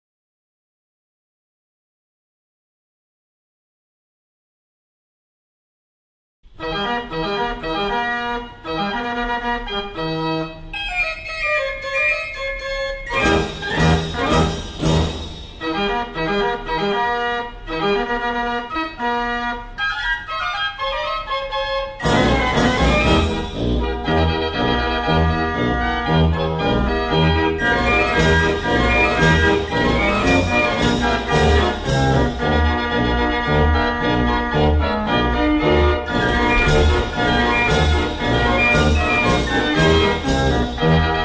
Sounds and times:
Electronic organ: 0:06.6 - 0:41.2.

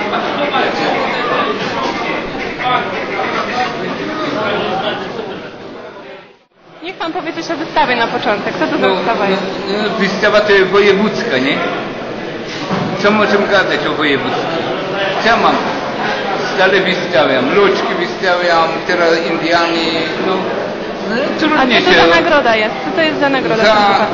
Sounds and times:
Inside, public space: 0:00.0 - 0:24.1.

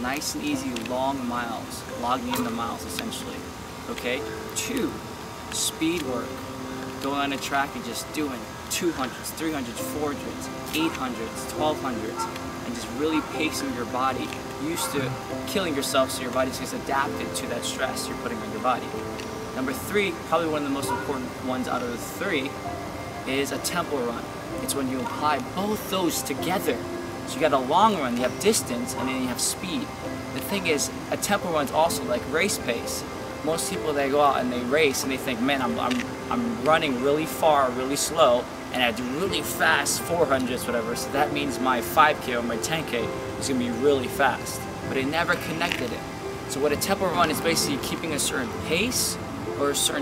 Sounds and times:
Speech: 0:00.0 - 0:05.0, 0:05.6 - 0:06.3, 0:07.0 - 0:19.0, 0:19.6 - 0:22.5, 0:23.3 - 0:50.0
Music: 0:00.0 - 0:50.0.

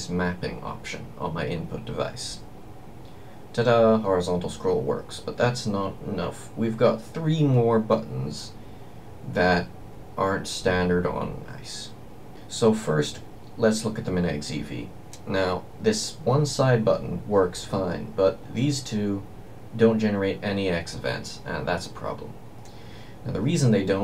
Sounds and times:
Speech: 0:00.0 - 0:02.5, 0:03.6 - 0:08.6, 0:09.2 - 0:22.4, 0:23.2 - 0:24.0.

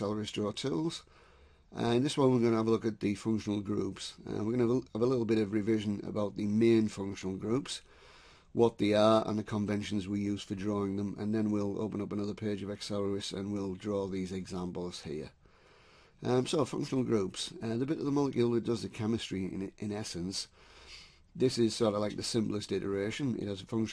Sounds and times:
Speech: 0:00.0 - 0:01.1, 0:01.7 - 0:07.9, 0:08.6 - 0:15.4, 0:16.2 - 0:20.6, 0:21.4 - 0:23.9.

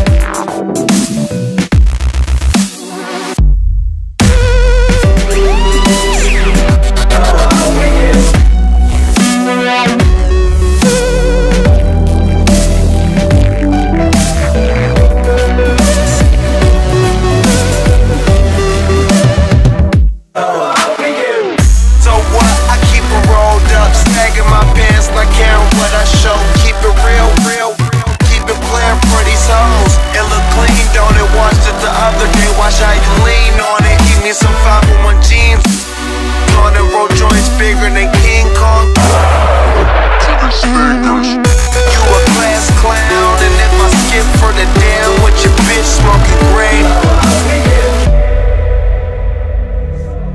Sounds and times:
Dubstep: 0:00.0 - 0:03.5, 0:04.2 - 0:20.0, 0:20.6 - 0:48.3.

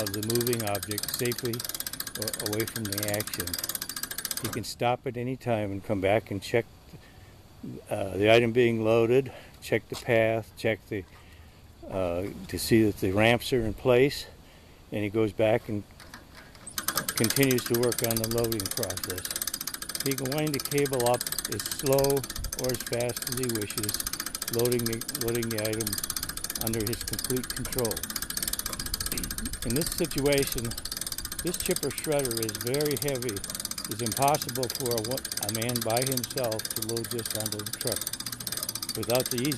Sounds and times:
Speech: 0:00.0 - 0:01.6, 0:02.2 - 0:03.6, 0:04.4 - 0:06.7, 0:07.6 - 0:11.1, 0:11.8 - 0:15.8, 0:17.2 - 0:19.3, 0:20.0 - 0:26.0, 0:26.6 - 0:28.0, 0:29.2 - 0:30.8, 0:31.4 - 0:38.0, 0:39.0 - 0:39.5.

